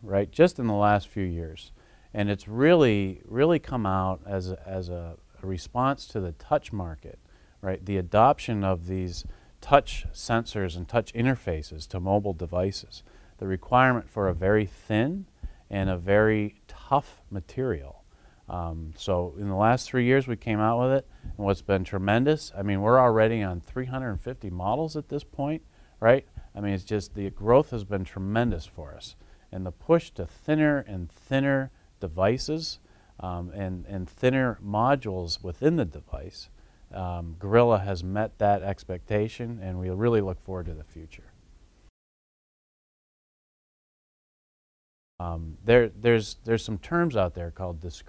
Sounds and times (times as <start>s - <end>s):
Speech: 0.0s - 41.4s, 45.2s - 48.0s.